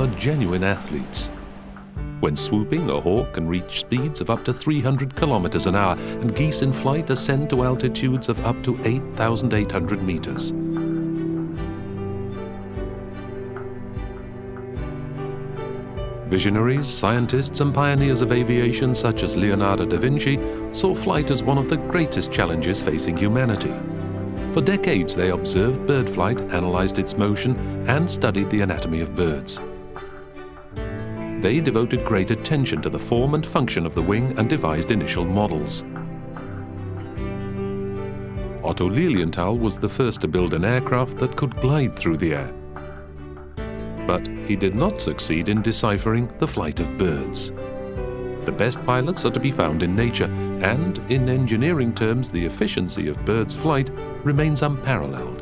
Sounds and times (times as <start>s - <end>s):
Speech: 0.0s - 1.3s, 2.2s - 10.5s, 16.3s - 23.8s, 24.5s - 29.6s, 31.4s - 35.8s, 38.6s - 42.6s, 44.1s - 47.5s, 48.5s - 55.4s
Music: 0.0s - 55.4s.